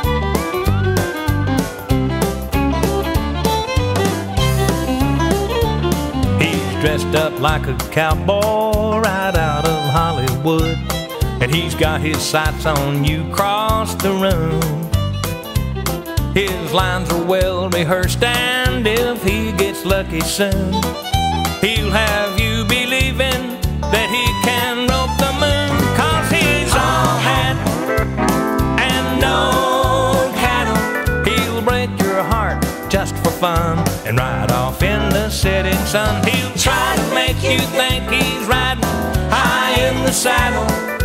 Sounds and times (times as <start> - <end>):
Music: 0.0 - 41.0.